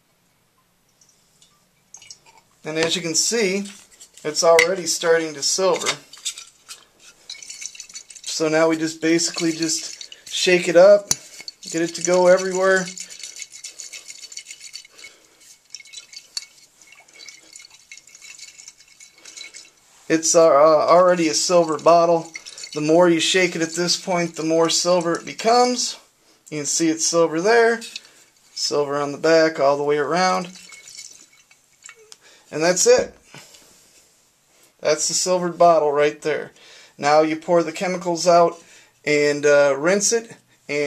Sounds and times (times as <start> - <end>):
Speech: 2.6 - 6.0, 8.3 - 13.0, 20.1 - 28.0, 28.6 - 30.6, 32.5 - 33.2, 34.8 - 40.8.